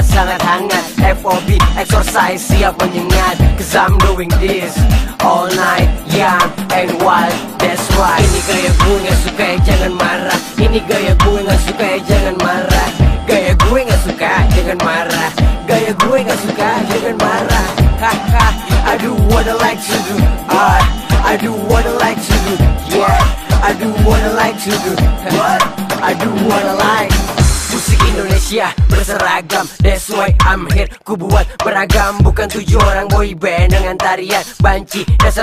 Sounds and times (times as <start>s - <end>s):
Afrobeat: 0.0s - 35.4s.